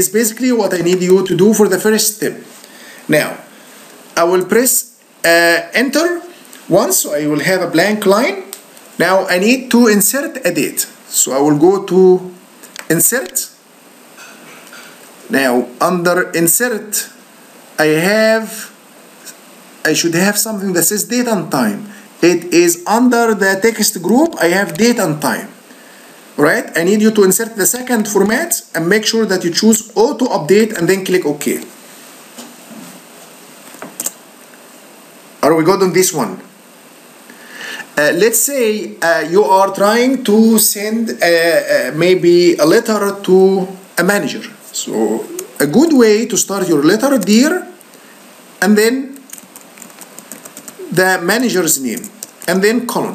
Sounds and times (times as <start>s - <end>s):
Speech: 0.0s - 2.5s, 3.1s - 3.5s, 4.2s - 13.6s, 15.3s - 17.2s, 17.8s - 18.8s, 19.8s - 25.6s, 26.4s - 31.7s, 35.4s - 36.6s, 38.0s - 47.8s, 48.6s - 49.2s, 50.8s - 53.1s.